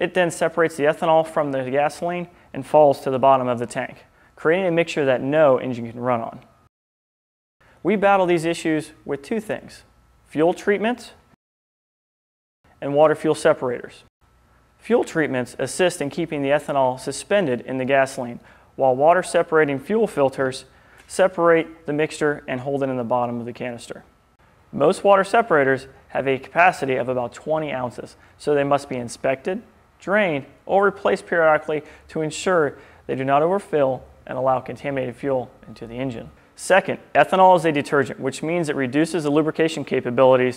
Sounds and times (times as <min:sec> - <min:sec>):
Speech: 0:00.0 - 0:06.5, 0:07.8 - 0:11.2, 0:12.8 - 0:14.1, 0:14.8 - 0:24.1, 0:24.8 - 0:40.5.